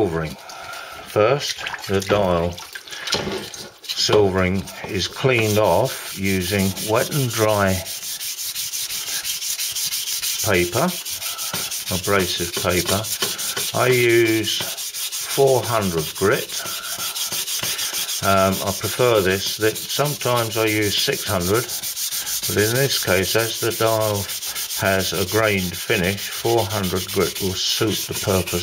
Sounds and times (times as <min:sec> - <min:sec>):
Speech: 0:00.0 - 0:00.4, 0:01.1 - 0:02.6, 0:04.0 - 0:07.9, 0:10.4 - 0:11.0, 0:11.9 - 0:13.2, 0:13.8 - 0:14.7, 0:15.3 - 0:16.5, 0:18.2 - 0:21.7, 0:22.5 - 0:28.6.